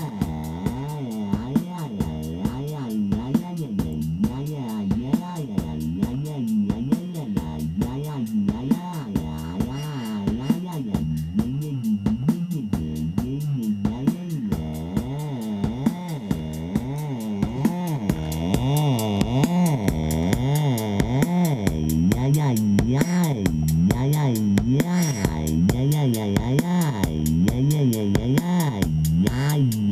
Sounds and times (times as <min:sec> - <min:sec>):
Synthesizer: 0:00.0 - 0:29.9.